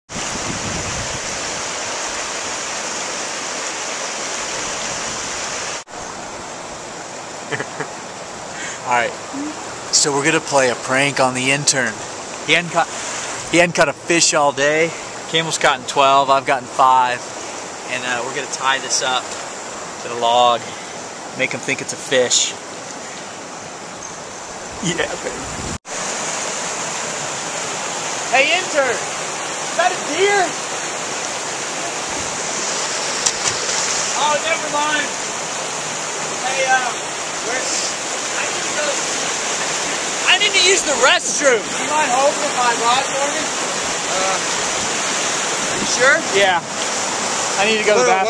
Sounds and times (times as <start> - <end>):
Stream: 0.1 - 48.2
Waterfall: 0.1 - 48.2.